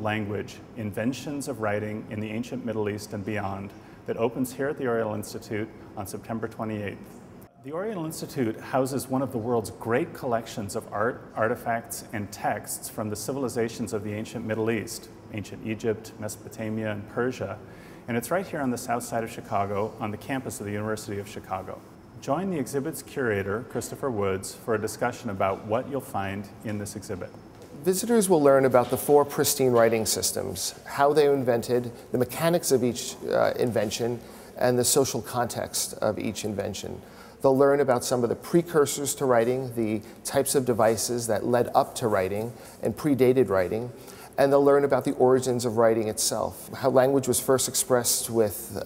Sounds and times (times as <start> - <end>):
Speech: 0.0 - 7.0, 7.6 - 48.8.